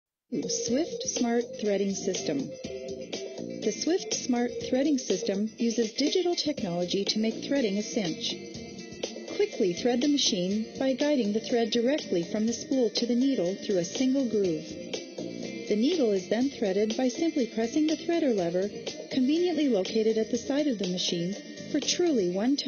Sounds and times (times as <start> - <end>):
Speech: 0.3 - 2.5, 3.6 - 8.4, 9.3 - 14.7, 15.7 - 22.6
Music: 0.3 - 22.6.